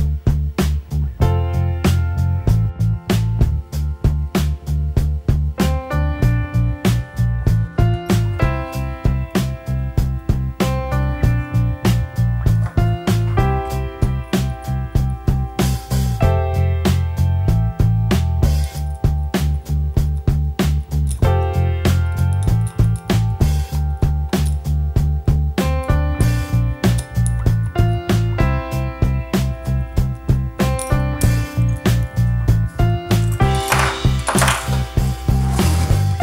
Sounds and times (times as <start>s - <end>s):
Music: 0.0s - 36.2s.